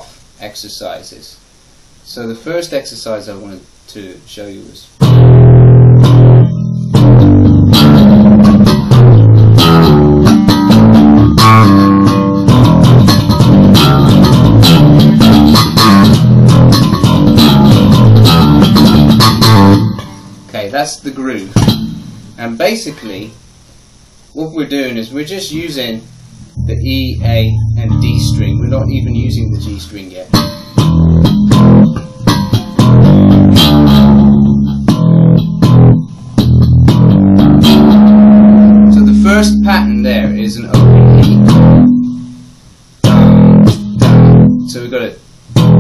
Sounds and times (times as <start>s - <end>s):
Speech: 0.4s - 1.4s, 2.1s - 4.9s, 20.5s - 21.6s, 22.4s - 23.4s, 24.4s - 30.4s, 38.9s - 40.8s, 44.7s - 45.2s
Music: 5.0s - 20.5s, 21.6s - 22.4s, 25.6s - 45.8s.